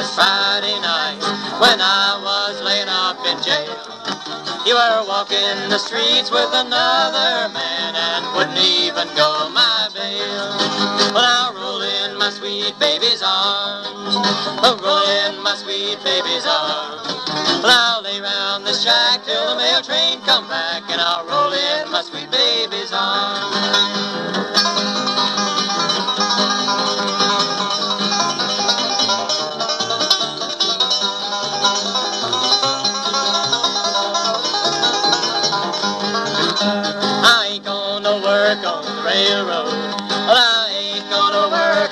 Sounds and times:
Bluegrass: 0.0s - 41.9s.

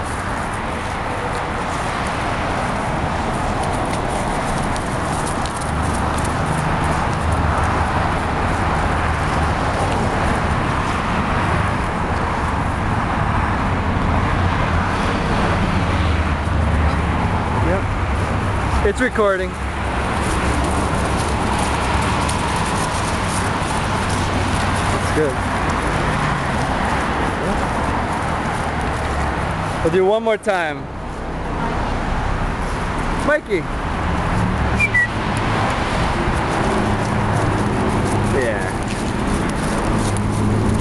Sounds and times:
Speech: 18.8s - 19.6s, 25.0s - 25.4s, 29.8s - 30.9s, 33.2s - 33.7s, 38.3s - 38.8s.

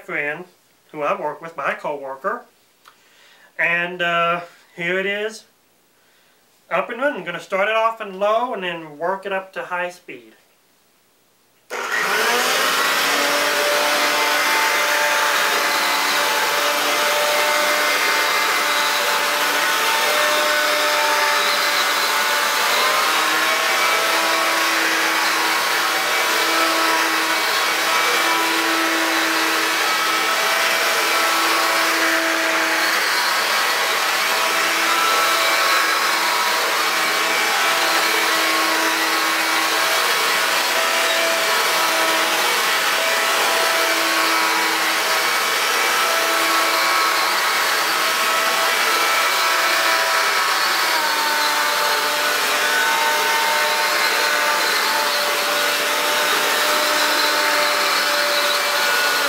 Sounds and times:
Vacuum cleaner: 11.7s - 59.2s.

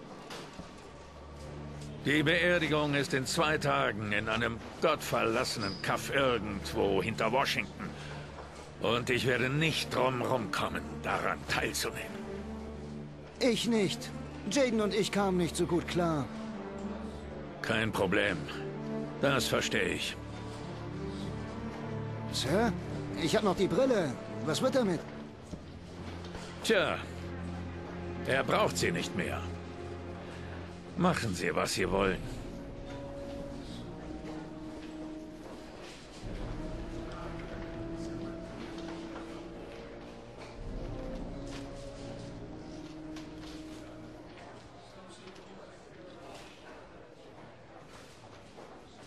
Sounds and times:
Music: 0.0s - 49.0s
Speech: 2.0s - 7.9s, 8.8s - 12.1s, 13.4s - 16.3s, 17.6s - 18.6s, 19.2s - 20.2s, 22.4s - 25.1s, 28.2s - 29.5s, 31.0s - 32.4s.

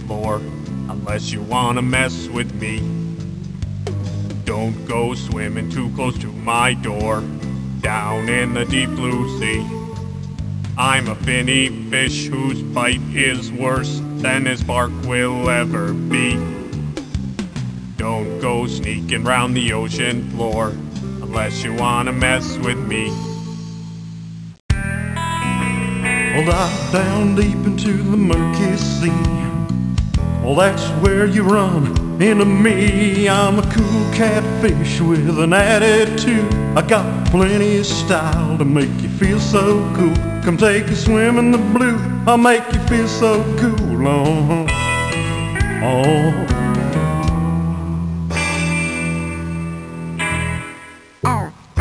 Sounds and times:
Music: 0.0s - 51.8s.

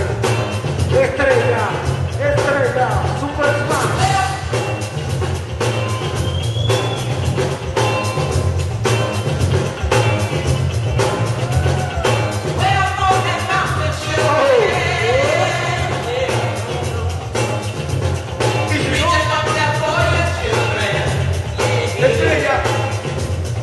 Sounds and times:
Music: 0.0s - 23.6s.

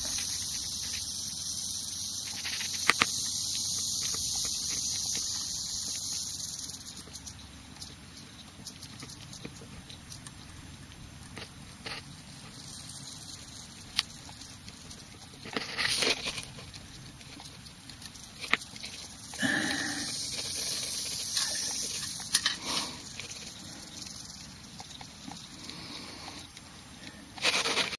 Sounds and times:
Hiss: 0.0s - 7.3s, 18.3s - 27.9s.

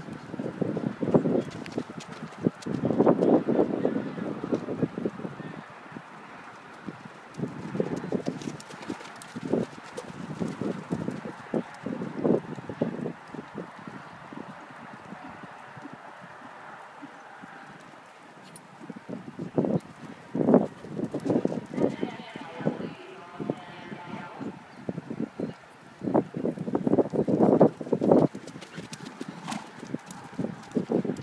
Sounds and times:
Horse: 6.6s - 24.6s, 26.4s - 31.2s
Speech: 21.8s - 24.6s.

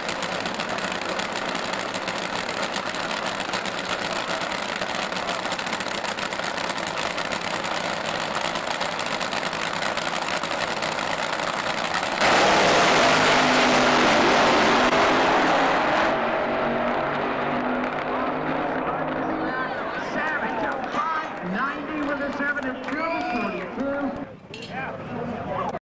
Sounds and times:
Motor vehicle (road): 0.0s - 25.8s
Speech: 18.2s - 25.8s.

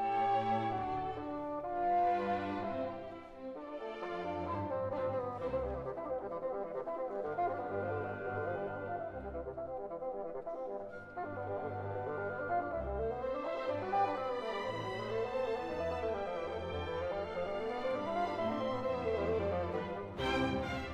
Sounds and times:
Cello: 0.0s - 20.9s
Classical music: 0.0s - 20.9s
Orchestra: 0.0s - 20.9s.

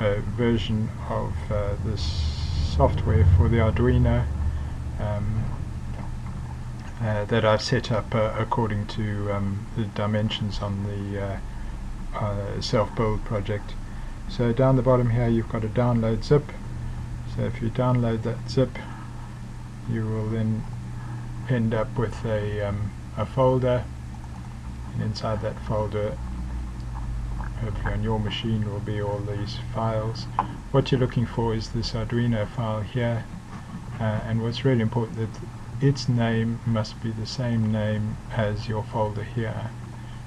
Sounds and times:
Speech: 0.0s - 4.3s, 5.0s - 5.6s, 7.0s - 11.4s, 12.2s - 16.6s, 17.3s - 19.0s, 19.9s - 20.7s, 21.5s - 23.9s, 25.0s - 26.2s, 27.5s - 33.3s, 34.0s - 39.8s.

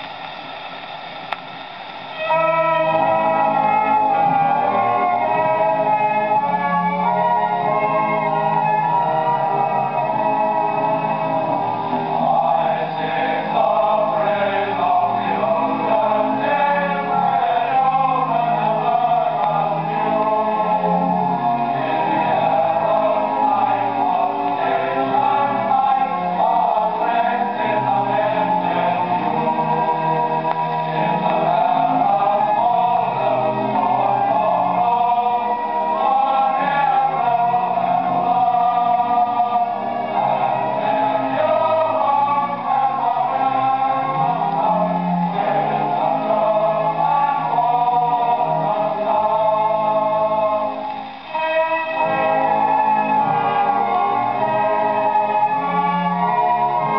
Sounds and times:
Music: 0.0s - 56.9s.

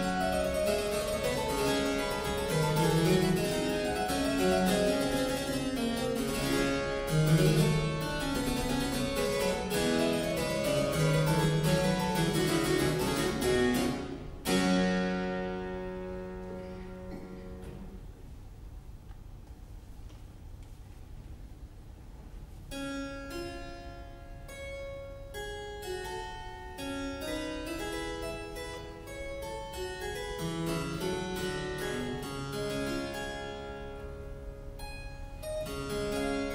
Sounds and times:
Harpsichord: 0.0s - 17.9s, 22.7s - 36.5s
Piano: 0.0s - 18.2s.

